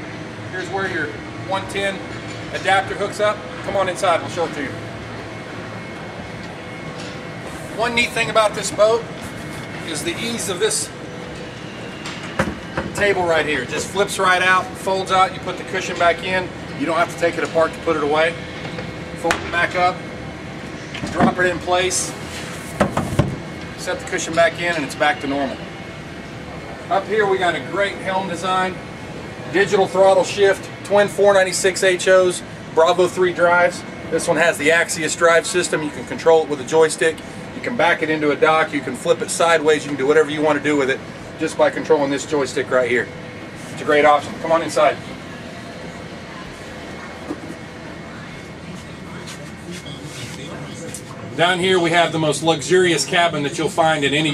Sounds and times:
Speech: 0.5 - 4.8, 7.8 - 9.1, 9.8 - 11.0, 13.0 - 18.4, 19.2 - 20.0, 21.1 - 22.2, 23.8 - 25.6, 26.9 - 28.8, 29.5 - 43.1, 43.8 - 45.1, 48.8 - 54.3.

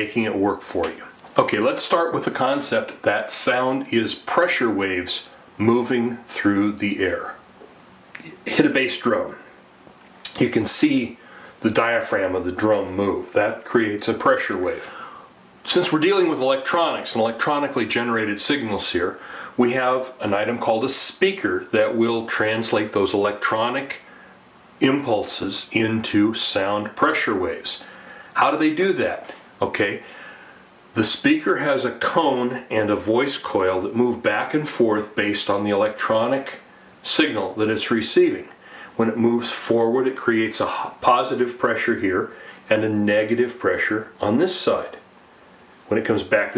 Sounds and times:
Speech: 0.0 - 7.5, 8.2 - 9.6, 10.3 - 24.2, 24.8 - 30.2, 30.9 - 45.1, 45.9 - 46.5.

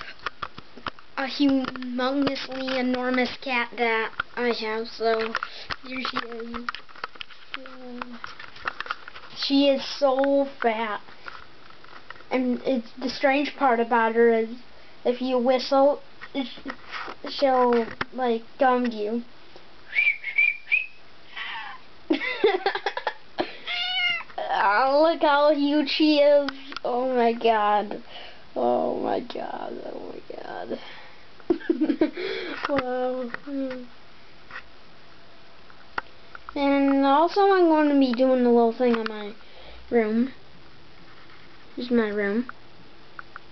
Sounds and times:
Speech: 1.2 - 6.7, 7.6 - 8.2, 9.3 - 11.0, 12.3 - 19.3, 24.4 - 30.9, 32.7 - 33.9, 36.6 - 40.4, 41.8 - 42.5
Meow: 23.7 - 24.3.

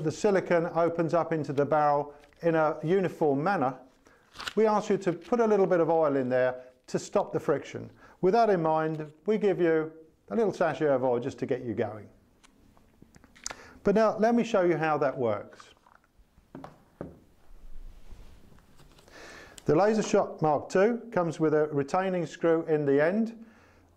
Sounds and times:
Speech: 0.0 - 3.9, 4.6 - 12.2, 13.8 - 15.8, 19.7 - 23.4.

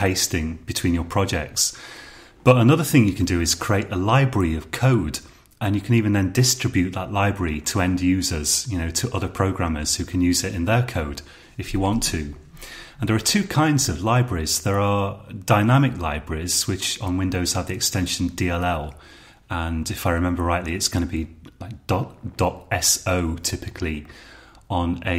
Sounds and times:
Speech: 0.0 - 1.8, 2.4 - 24.1, 24.7 - 25.1.

